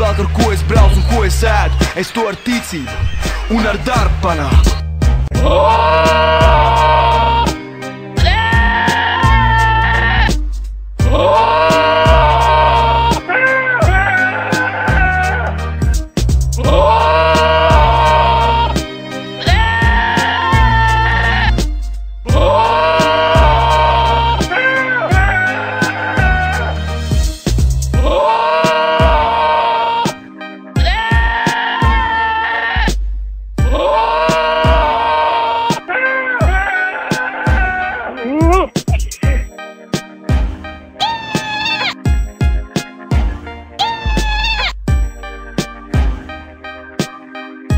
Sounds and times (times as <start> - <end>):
Music: 0.0 - 47.7.